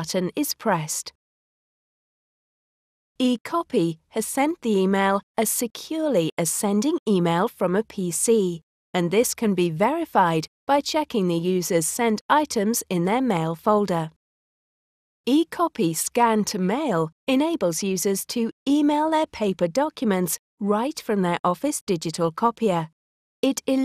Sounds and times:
Speech: 0.0s - 1.2s, 3.2s - 14.2s, 15.3s - 23.8s.

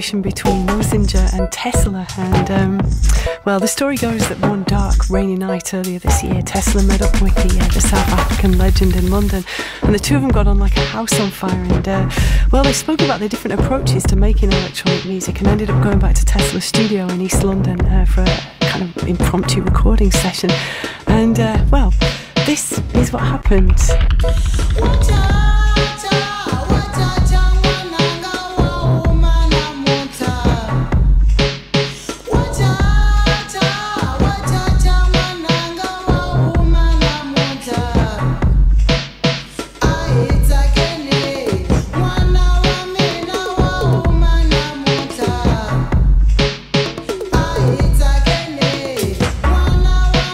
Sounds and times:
Speech: 0.0s - 24.0s
Music: 0.0s - 50.3s.

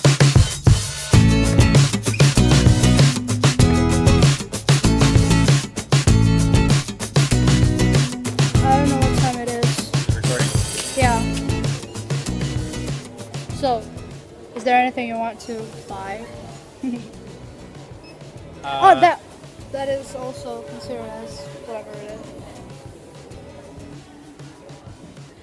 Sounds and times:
Music: 0.0s - 25.4s
Conversation: 3.2s - 25.0s.

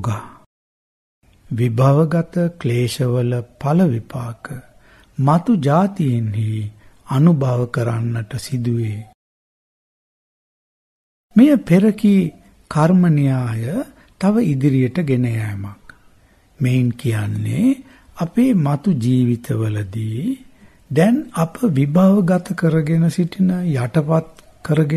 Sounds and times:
Speech: 0.0s - 0.5s, 1.5s - 9.2s, 11.4s - 16.0s, 16.6s - 24.9s.

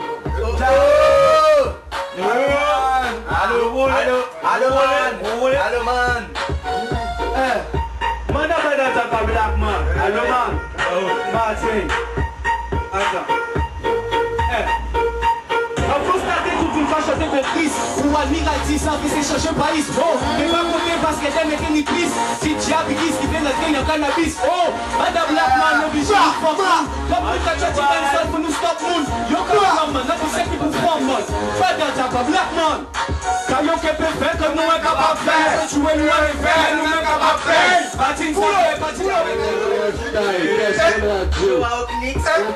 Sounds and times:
Music: 0.0s - 42.5s.

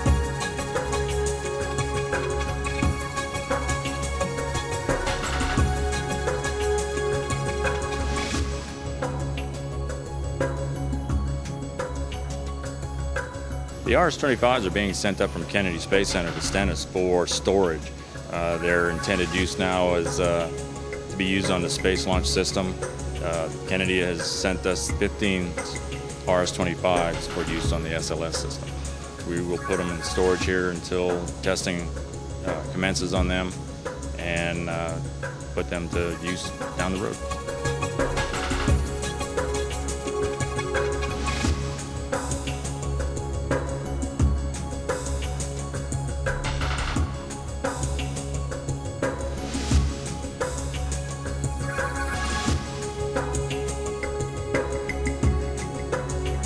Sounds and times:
Music: 0.0s - 56.4s
Speech: 13.9s - 20.6s, 21.2s - 28.6s, 29.2s - 33.6s, 34.2s - 35.0s, 35.6s - 37.2s.

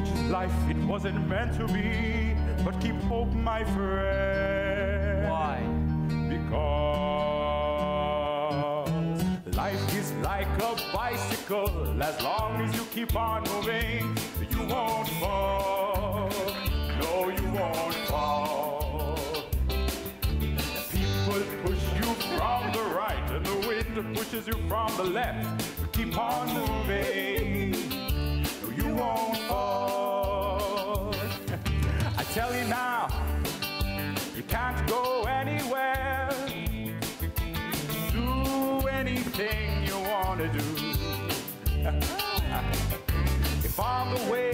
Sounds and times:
Music: 0.0s - 44.5s.

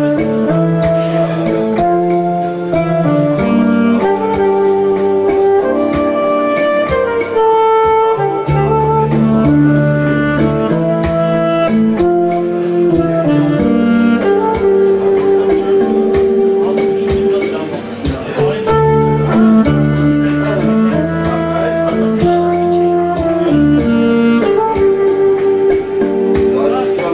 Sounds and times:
Inside, public space: 0.0s - 27.1s
Saxophone: 0.0s - 27.1s
Speech: 15.6s - 19.4s, 20.2s - 23.6s, 26.4s - 27.1s.

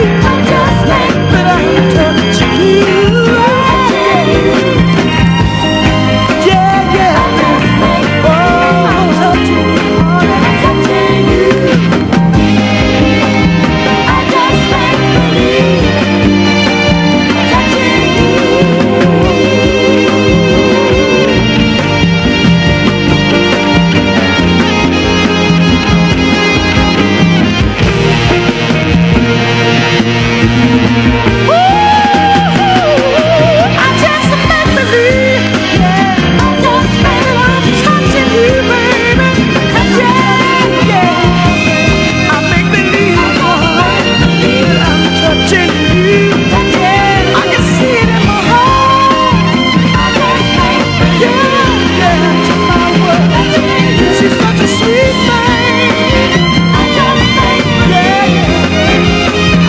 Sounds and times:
Music: 0.0s - 59.6s.

